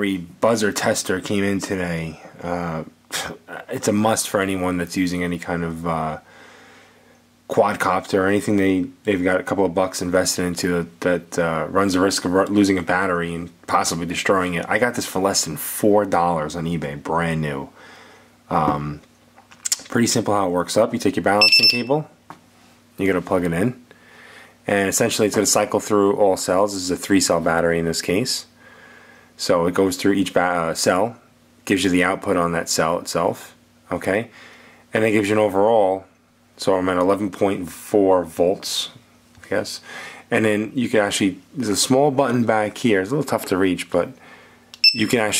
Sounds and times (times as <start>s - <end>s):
Speech: 0.0s - 6.3s, 7.5s - 17.8s, 18.5s - 19.1s, 19.7s - 22.2s, 23.0s - 23.8s, 24.7s - 28.6s, 29.4s - 44.2s, 45.0s - 45.4s.